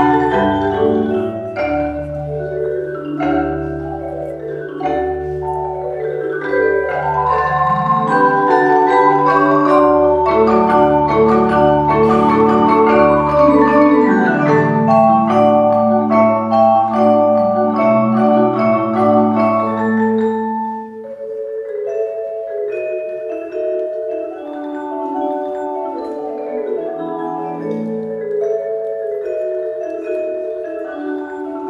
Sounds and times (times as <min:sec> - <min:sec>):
Glockenspiel: 0:00.0 - 0:31.6
Marimba, xylophone: 0:00.0 - 0:31.6.